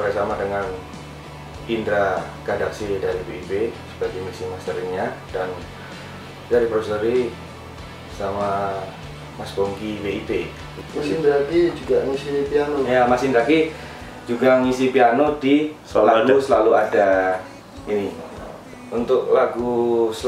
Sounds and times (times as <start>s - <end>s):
Speech: 0.0s - 0.9s, 1.7s - 5.7s, 6.5s - 7.4s, 8.1s - 13.7s, 14.3s - 20.2s
Music: 0.0s - 20.2s.